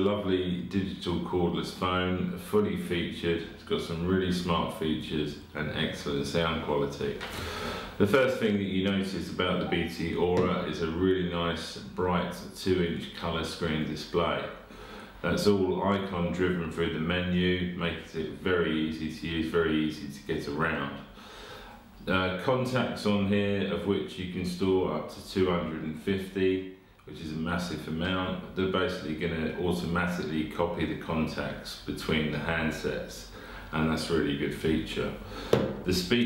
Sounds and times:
Speech: 0.0s - 7.3s, 8.0s - 21.2s, 22.0s - 36.2s.

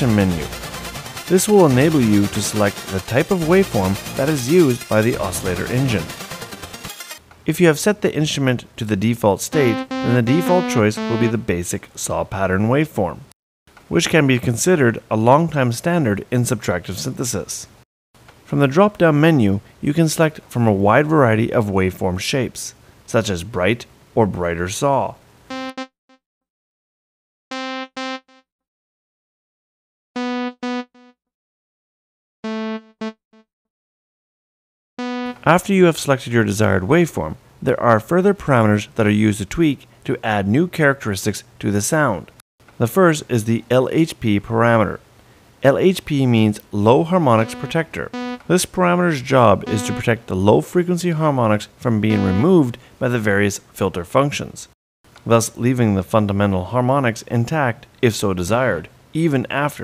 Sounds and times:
Speech: 0.0s - 0.6s, 1.3s - 6.1s, 7.5s - 13.3s, 13.9s - 17.8s, 18.5s - 25.2s, 35.4s - 45.0s, 45.6s - 59.8s
Music: 0.0s - 7.2s, 9.6s - 11.5s, 30.2s - 31.2s, 35.0s - 35.5s, 47.3s - 48.5s, 49.6s - 50.3s, 52.1s - 52.6s.

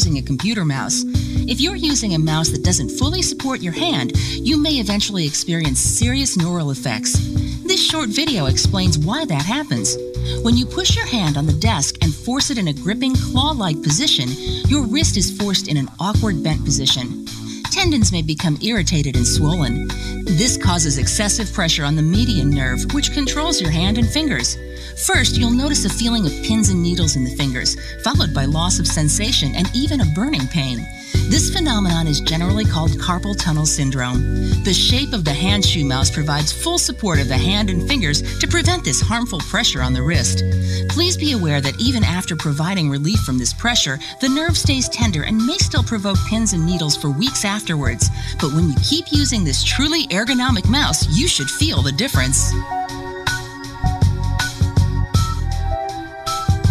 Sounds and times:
Speech: 0.0s - 52.6s
Music: 0.0s - 56.7s.

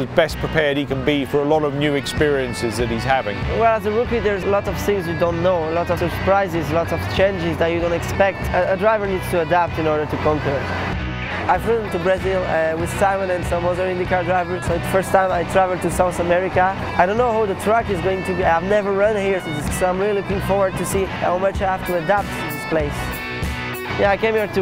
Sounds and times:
Speech: 0.0s - 10.6s, 11.5s - 23.1s, 24.0s - 24.6s
Music: 0.0s - 24.6s.

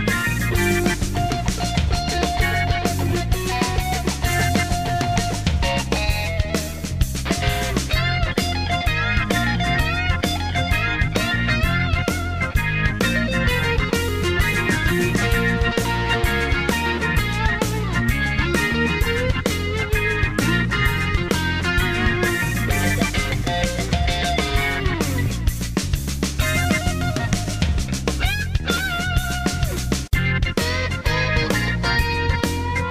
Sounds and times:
Music: 0.0s - 32.9s.

